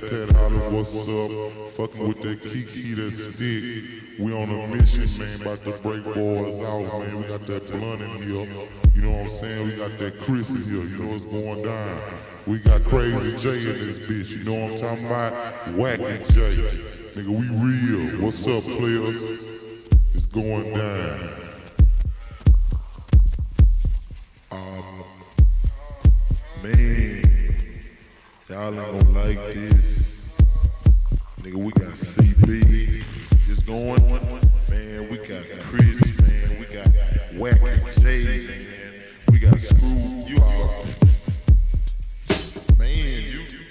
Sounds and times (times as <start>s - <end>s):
Speech: 0.0s - 19.5s, 20.2s - 22.5s, 24.5s - 27.6s, 28.4s - 30.8s, 31.4s - 41.2s, 42.8s - 43.7s.